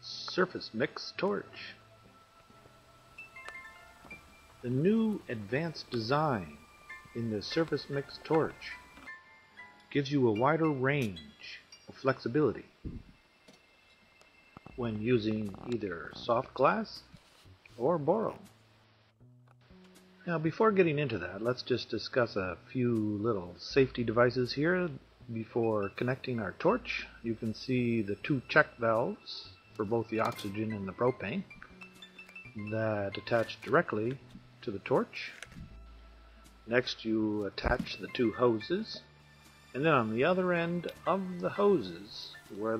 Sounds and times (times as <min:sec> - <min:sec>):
Speech: 0:00.0 - 0:01.8, 0:04.6 - 0:06.6, 0:07.2 - 0:08.8, 0:09.9 - 0:12.7, 0:14.8 - 0:17.1, 0:17.8 - 0:18.5, 0:20.2 - 0:31.5, 0:32.6 - 0:35.4, 0:36.7 - 0:39.0, 0:39.8 - 0:42.7.